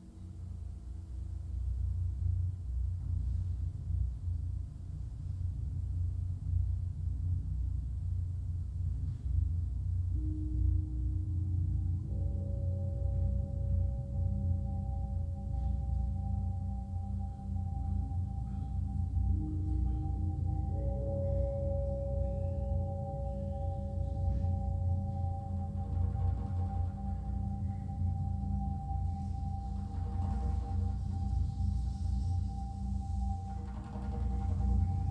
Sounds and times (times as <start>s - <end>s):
Percussion: 0.0s - 35.1s.